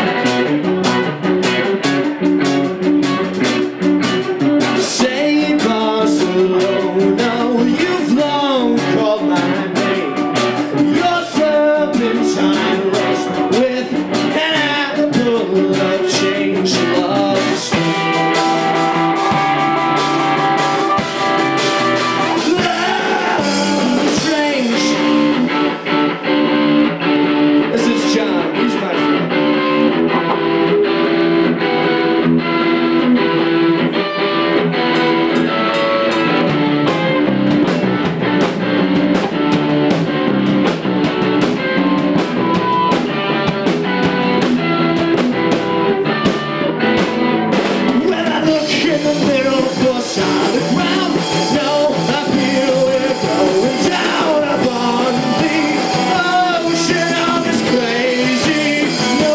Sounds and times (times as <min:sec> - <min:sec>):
Electric guitar: 0:00.0 - 0:59.3
Speech: 0:04.9 - 0:10.2, 0:22.5 - 0:25.1, 0:27.7 - 0:29.2, 0:48.0 - 0:59.3
Tapping (guitar technique): 0:08.6 - 0:59.3.